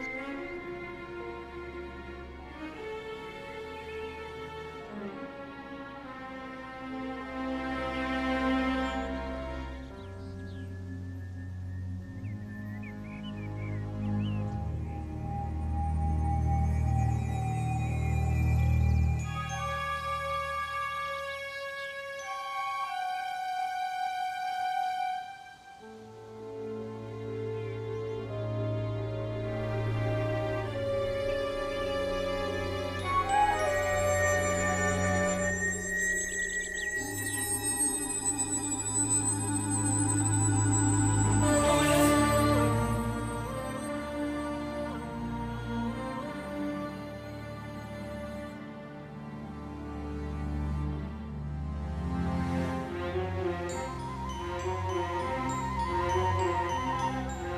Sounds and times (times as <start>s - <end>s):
Theme music: 0.0s - 57.5s.